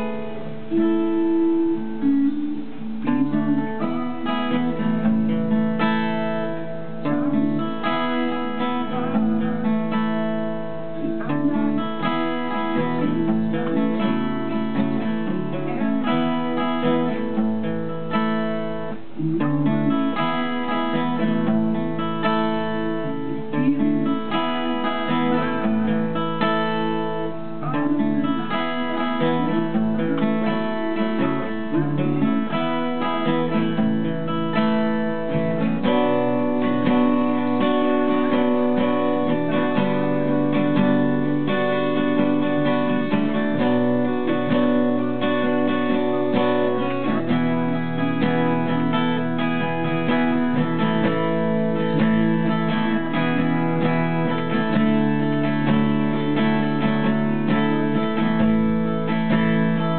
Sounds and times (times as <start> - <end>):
Guitar: 0.0 - 59.9.